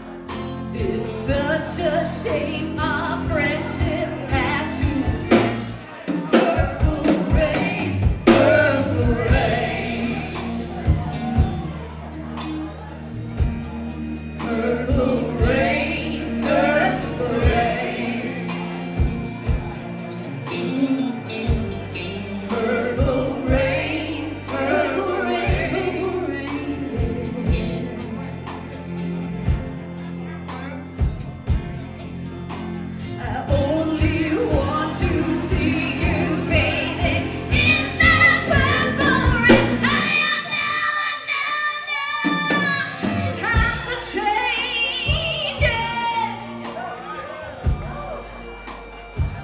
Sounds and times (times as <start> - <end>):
Gospel music: 0.0 - 49.4
Singing: 0.8 - 11.6, 14.4 - 19.0, 22.4 - 28.6, 33.2 - 48.2.